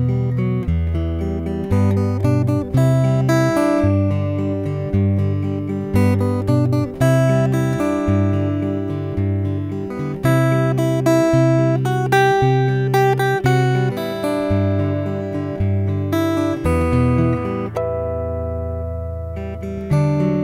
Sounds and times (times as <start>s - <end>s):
Acoustic guitar: 0.0s - 20.4s.